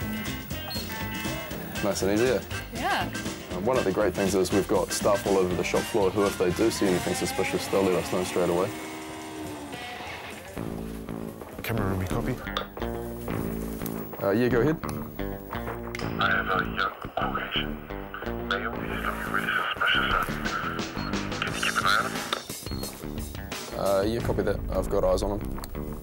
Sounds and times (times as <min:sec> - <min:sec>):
Music: 0:00.0 - 0:26.0
Radio: 0:16.0 - 0:22.4.